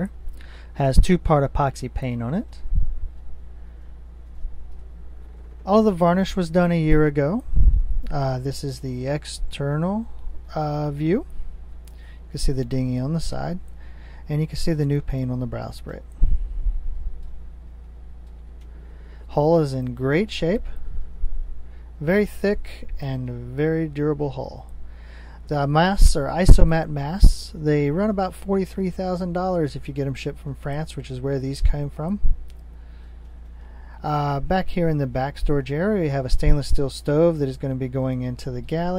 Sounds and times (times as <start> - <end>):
Speech: 0.8 - 2.6, 5.7 - 7.4, 8.1 - 11.3, 12.3 - 13.6, 14.3 - 16.1, 19.3 - 20.8, 22.0 - 24.7, 25.5 - 32.3, 34.0 - 38.9.